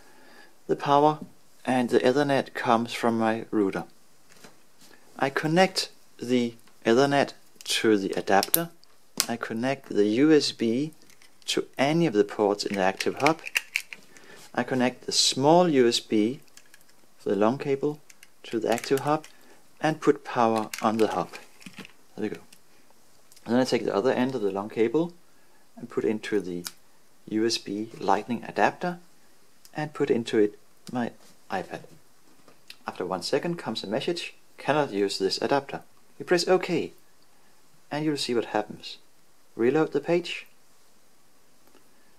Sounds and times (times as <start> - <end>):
Speech: 0.7 - 3.9, 5.2 - 13.4, 14.5 - 16.4, 17.2 - 21.4, 22.2 - 22.5, 23.4 - 25.2, 25.8 - 26.7, 27.3 - 29.0, 29.7 - 32.0, 32.7 - 37.0, 37.9 - 39.0, 39.6 - 40.5.